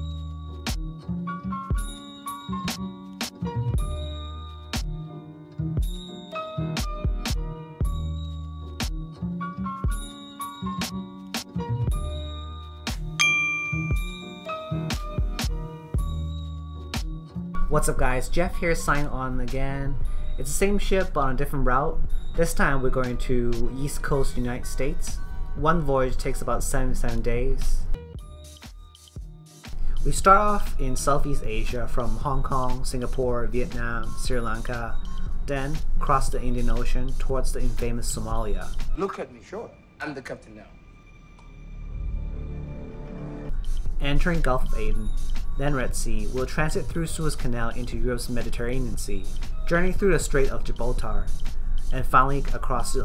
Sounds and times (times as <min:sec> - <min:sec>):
Music: 0:00.0 - 0:53.0
Speech: 0:17.6 - 0:27.9, 0:30.0 - 0:40.8, 0:44.0 - 0:51.3, 0:51.9 - 0:53.0.